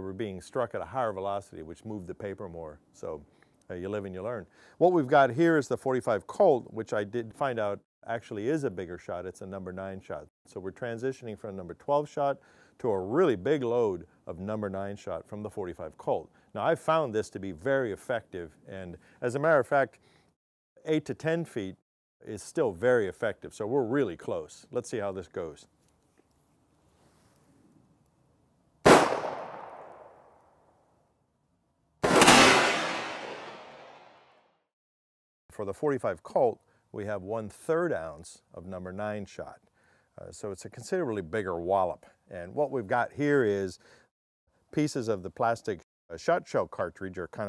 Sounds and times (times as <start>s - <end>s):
Speech: 0.0s - 20.0s, 20.8s - 25.7s, 35.5s - 43.8s, 44.7s - 47.4s.